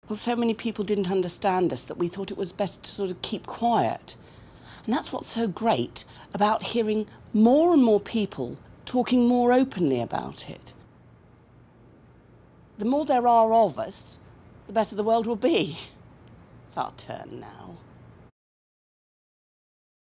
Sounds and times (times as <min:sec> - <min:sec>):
Speech: 0:00.1 - 0:04.2, 0:04.8 - 0:10.8, 0:12.8 - 0:16.0, 0:16.7 - 0:17.8.